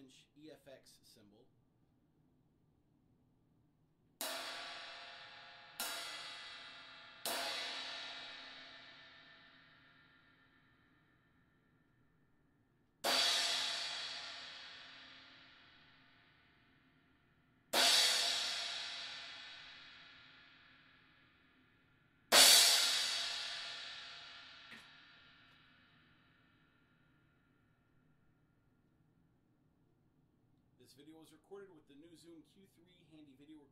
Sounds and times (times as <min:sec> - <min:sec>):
Cymbal: 0:04.2 - 0:11.2, 0:13.0 - 0:17.0, 0:17.7 - 0:26.9.